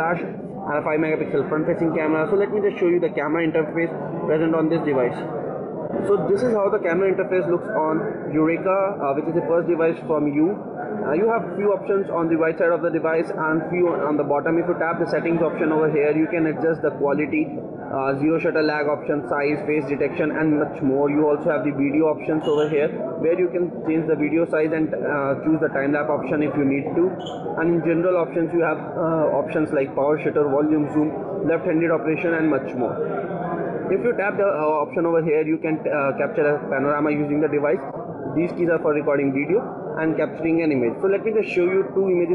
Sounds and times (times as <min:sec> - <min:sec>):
Speech: 0:00.0 - 0:42.3.